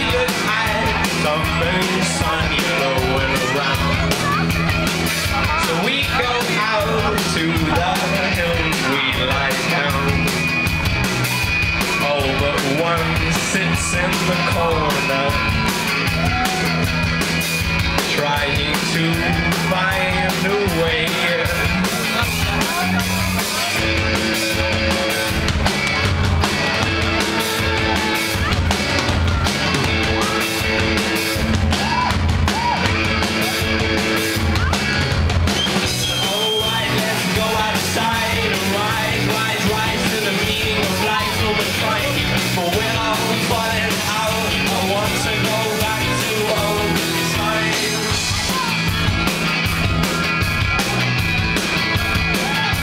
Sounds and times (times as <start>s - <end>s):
Music: 0.0s - 52.8s.